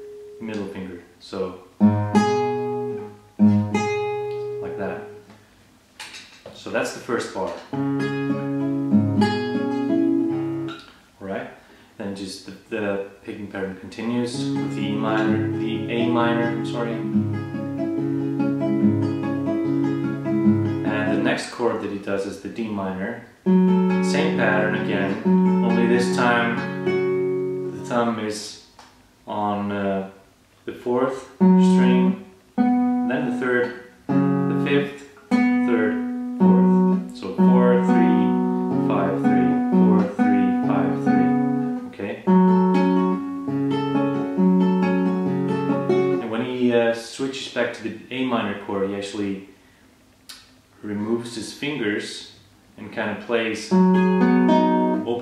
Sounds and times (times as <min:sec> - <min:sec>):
Guitar: 0:00.0 - 0:11.1, 0:12.7 - 0:30.0, 0:30.9 - 0:48.9, 0:52.8 - 0:55.2
Speech: 0:00.4 - 0:01.7, 0:04.6 - 0:05.1, 0:06.5 - 0:07.7, 0:11.2 - 0:17.1, 0:20.8 - 0:23.3, 0:24.0 - 0:26.6, 0:27.8 - 0:28.7, 0:29.3 - 0:32.3, 0:33.1 - 0:33.9, 0:34.5 - 0:43.0, 0:46.2 - 0:49.5, 0:50.8 - 0:53.8, 0:55.0 - 0:55.2.